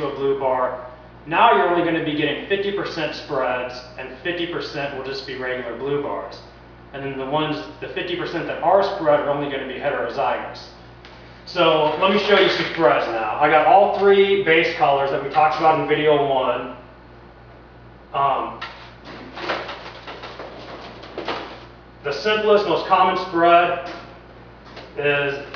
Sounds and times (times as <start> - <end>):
Speech: 0.0 - 10.8, 11.5 - 16.8, 18.1 - 18.6, 22.0 - 24.0, 25.0 - 25.5.